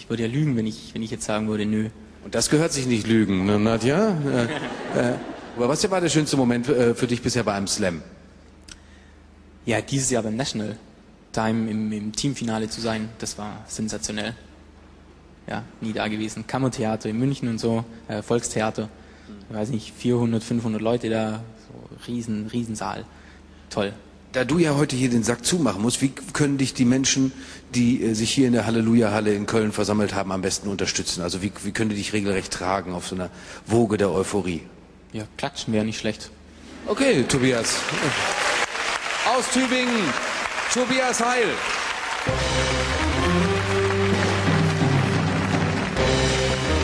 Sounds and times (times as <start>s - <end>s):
Speech: 0.0s - 8.1s, 9.7s - 14.5s, 15.5s - 23.1s, 23.7s - 38.2s, 39.2s - 41.6s.